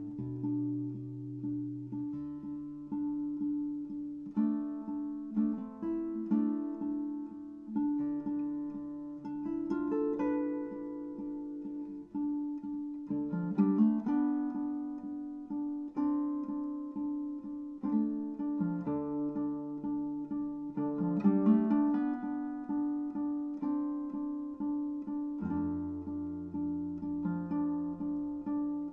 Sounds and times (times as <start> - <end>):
Guitar: 0.0 - 28.9.